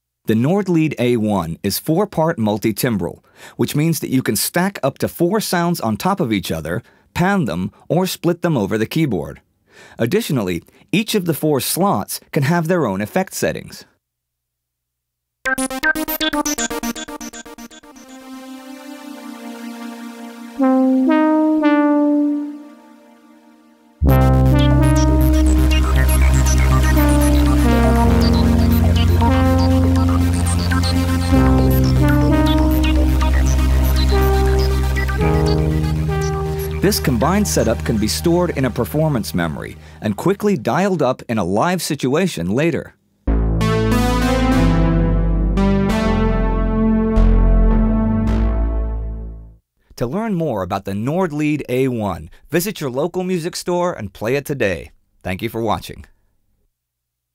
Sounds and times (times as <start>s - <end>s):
Synthesizer: 15.5s - 40.0s, 43.3s - 49.5s
Piano: 20.6s - 23.0s, 24.0s - 39.0s.